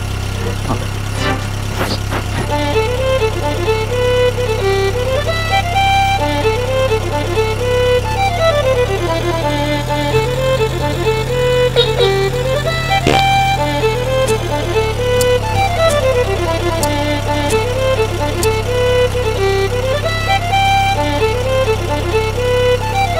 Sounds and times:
Car: 0.0 - 23.1
Music: 2.4 - 23.1.

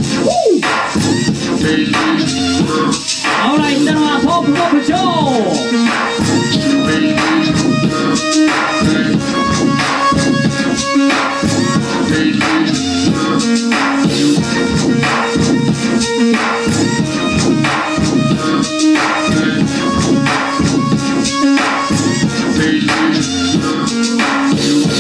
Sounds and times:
Music: 0.0 - 25.0.

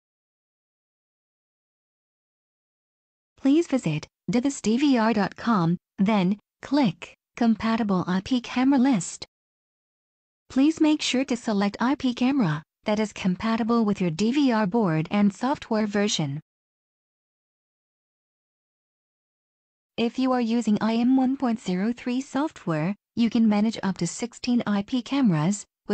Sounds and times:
Speech: 3.4 - 9.3, 10.5 - 16.4, 20.0 - 25.9.

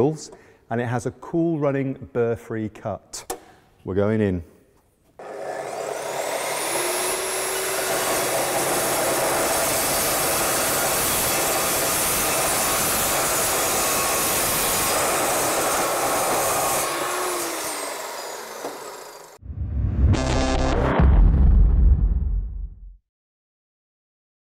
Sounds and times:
Music: 19.5 - 22.8.

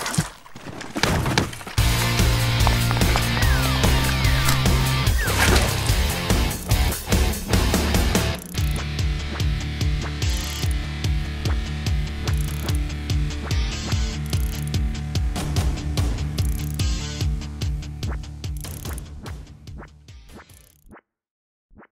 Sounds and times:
Music: 1.8 - 21.1.

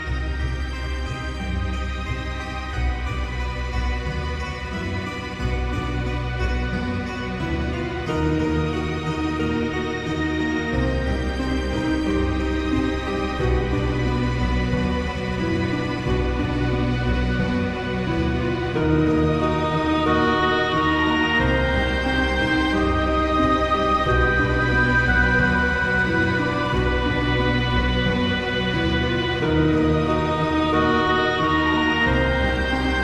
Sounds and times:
Music: 0.0 - 33.0.

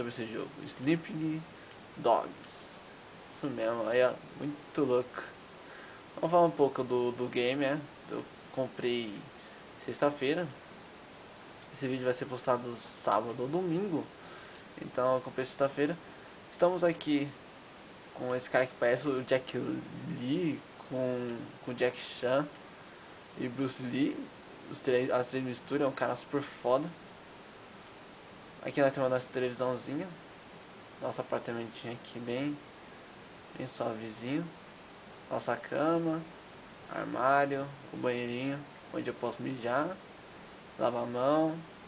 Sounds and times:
Speech: 0.0 - 5.4, 6.2 - 10.6, 11.7 - 14.1, 14.8 - 17.4, 18.2 - 22.6, 23.4 - 27.0, 28.6 - 30.2, 31.0 - 32.6, 33.5 - 34.6, 35.3 - 36.3, 36.9 - 40.0, 40.8 - 41.7.

